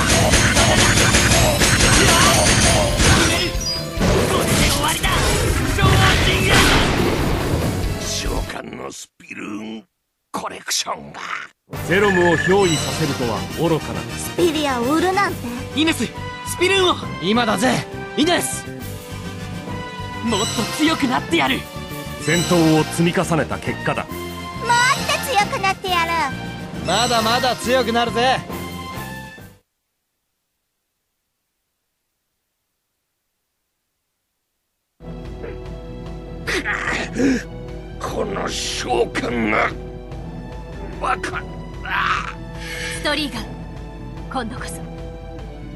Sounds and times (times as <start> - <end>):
Music: 0.0 - 6.8, 7.5 - 8.6, 11.7 - 29.6, 35.0 - 45.7
Speech: 8.1 - 13.8.